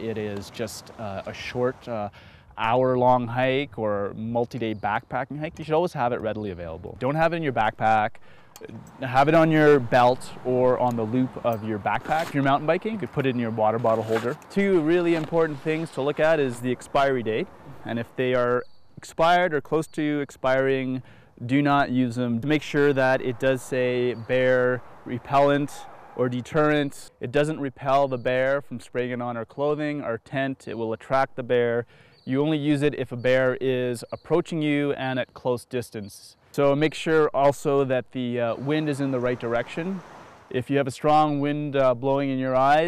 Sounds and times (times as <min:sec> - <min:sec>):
Speech: 0:00.0 - 0:42.8.